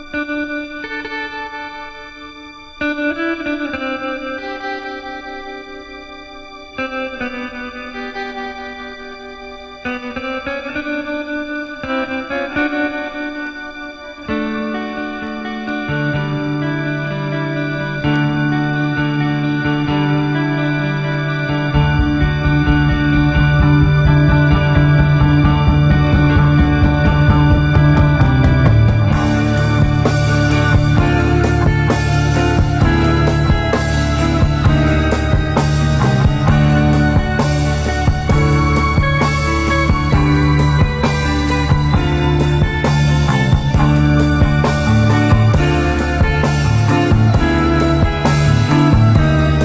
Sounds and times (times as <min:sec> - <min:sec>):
Music: 0:00.0 - 0:49.6.